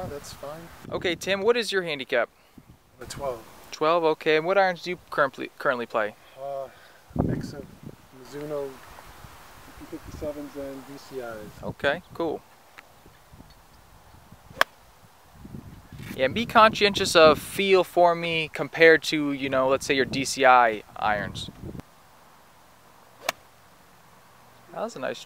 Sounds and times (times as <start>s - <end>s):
Speech: 0.0s - 2.3s, 3.0s - 6.7s, 7.3s - 8.8s, 9.7s - 12.4s, 24.7s - 25.2s
Outside, rural or natural: 0.0s - 25.2s.